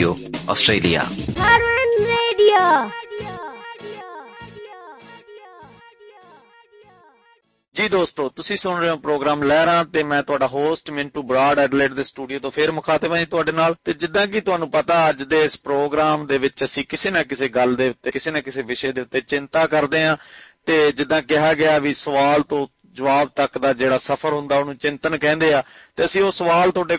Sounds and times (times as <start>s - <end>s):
Speech: 0.0s - 1.2s, 7.8s - 26.9s.